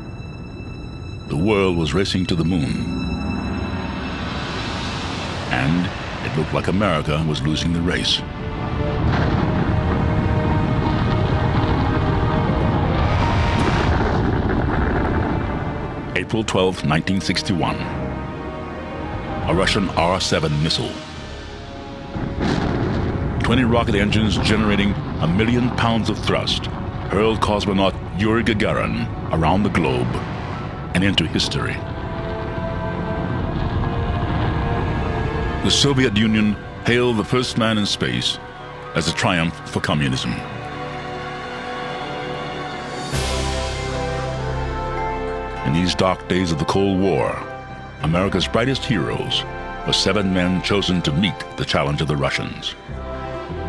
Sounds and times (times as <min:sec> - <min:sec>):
Speech: 0:01.3 - 0:03.0, 0:05.5 - 0:08.3, 0:16.2 - 0:18.0, 0:19.5 - 0:21.0, 0:23.4 - 0:30.2, 0:31.0 - 0:31.8, 0:35.6 - 0:38.4, 0:39.0 - 0:40.5, 0:45.6 - 0:52.8.